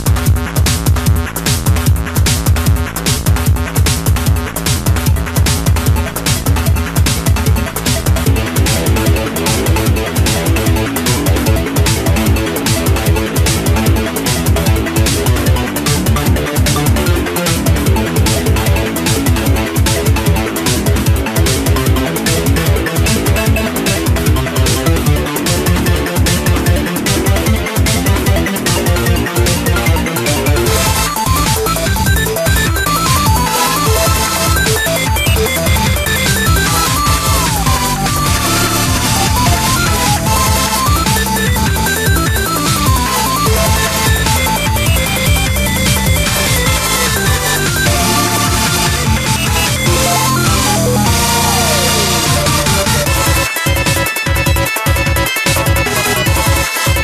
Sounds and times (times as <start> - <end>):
Music: 0.0 - 57.0.